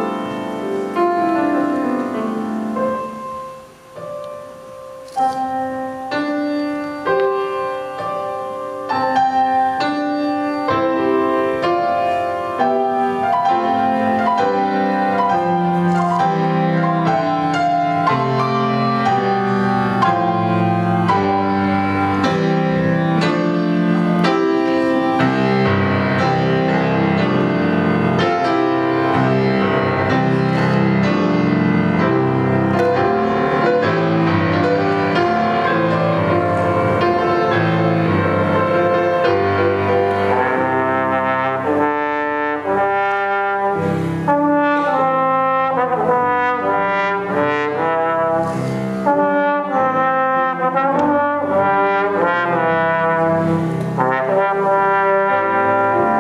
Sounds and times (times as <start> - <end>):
Music: 0.0 - 56.2.